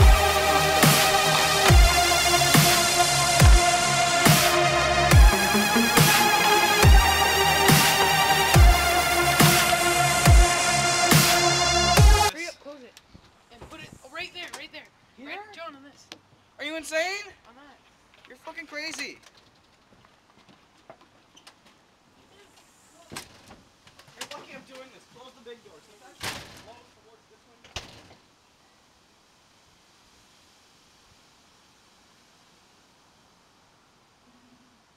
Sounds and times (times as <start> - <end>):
Speech: 12.3 - 19.2, 22.2 - 23.2, 24.2 - 27.8.